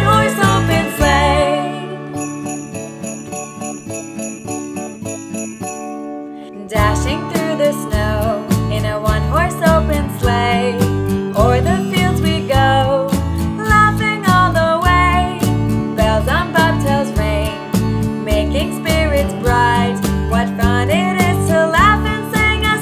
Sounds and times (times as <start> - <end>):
Jingle (music): 0.0 - 22.8.